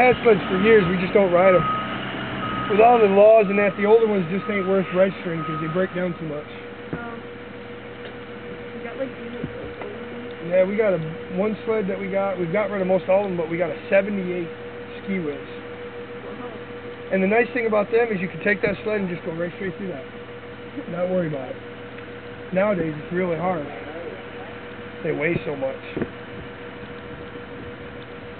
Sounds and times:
Truck: 0.0s - 28.3s.

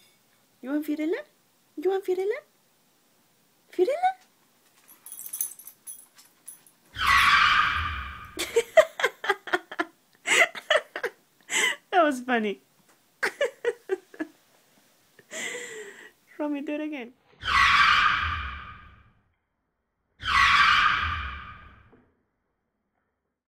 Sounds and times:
Speech: 0.6s - 2.5s, 3.7s - 4.2s, 11.9s - 12.6s, 16.3s - 17.2s.

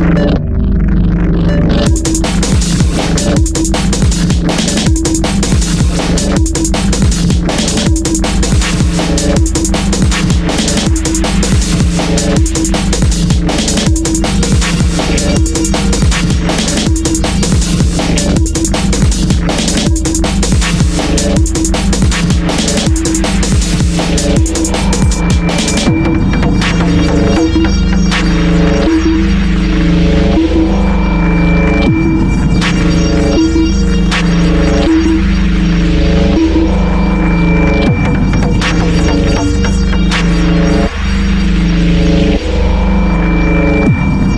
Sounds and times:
Ambient music: 0.0s - 44.3s
Drum and bass: 0.0s - 44.3s.

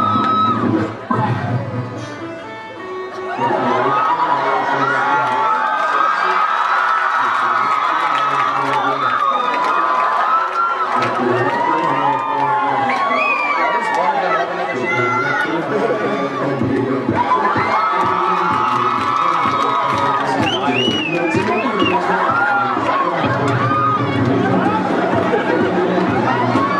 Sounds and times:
Cheering: 0.0s - 1.3s, 3.2s - 26.7s
Music: 0.0s - 6.0s, 10.6s - 26.7s
Crowd: 0.0s - 26.7s
Speech: 3.3s - 6.5s, 7.2s - 10.0s, 11.0s - 17.4s.

